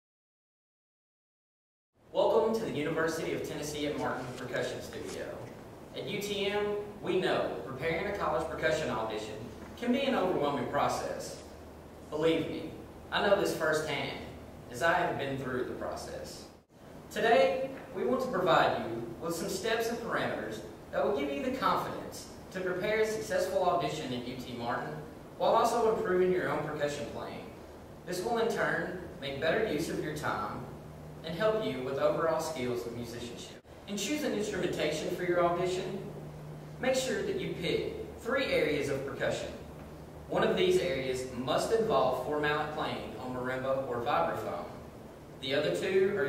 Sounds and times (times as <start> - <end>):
Speech: 2.1 - 11.5, 12.1 - 36.2, 36.8 - 39.7, 40.3 - 44.8, 45.4 - 46.2.